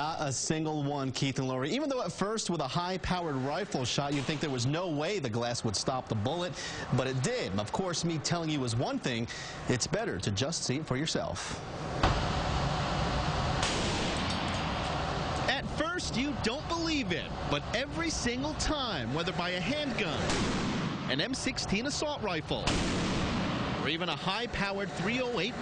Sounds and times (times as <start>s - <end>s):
Speech: 0.0s - 11.4s, 15.5s - 20.3s, 21.1s - 22.7s, 23.8s - 25.6s.